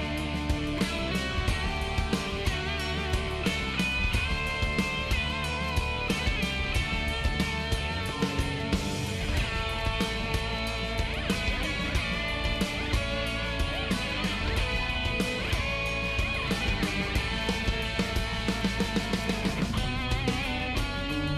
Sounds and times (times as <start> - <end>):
Music: 0.0 - 21.3.